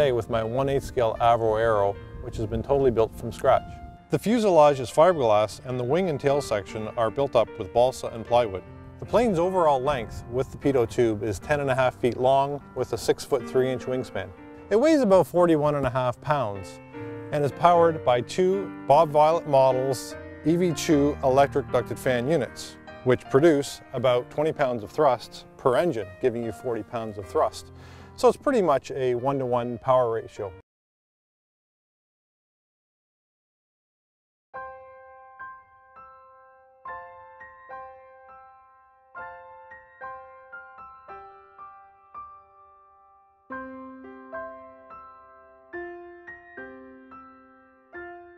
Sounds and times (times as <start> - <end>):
Speech: 0.0 - 27.6, 28.2 - 30.6
Music: 0.0 - 30.6, 34.6 - 48.3.